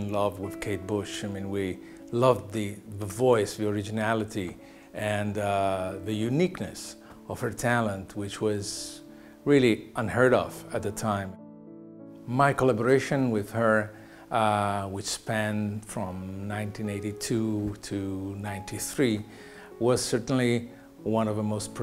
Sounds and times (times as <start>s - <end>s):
Speech: 0.0s - 11.4s, 12.3s - 21.8s
Music: 0.0s - 21.8s.